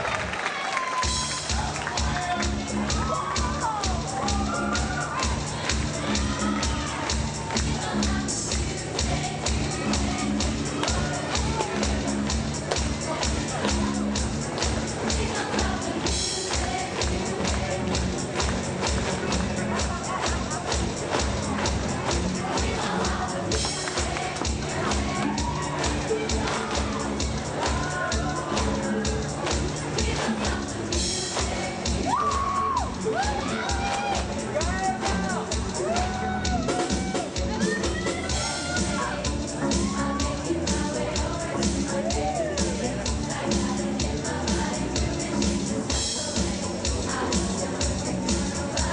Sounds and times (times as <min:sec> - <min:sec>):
Pop music: 0:00.8 - 0:48.9
Exciting music: 0:01.0 - 0:48.9
Speech: 0:33.4 - 0:35.7, 0:37.3 - 0:44.9.